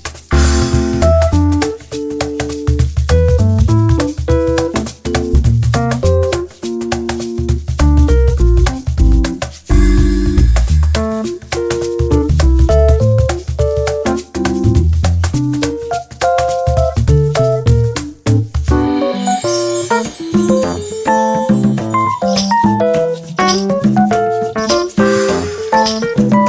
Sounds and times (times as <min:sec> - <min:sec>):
Music: 0:00.0 - 0:26.4.